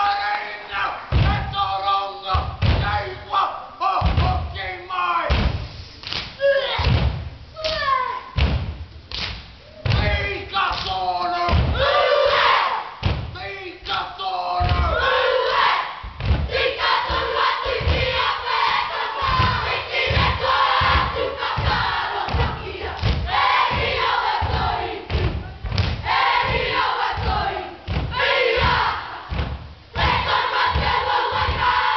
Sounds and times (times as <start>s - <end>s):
Thump, thud: 1.1s - 1.4s, 2.4s - 2.9s, 4.0s - 4.4s, 5.3s - 5.6s, 6.8s - 7.3s, 8.4s - 8.8s, 11.5s - 11.9s, 13.0s - 13.4s, 14.6s - 15.0s, 16.0s - 18.2s, 19.3s - 31.8s.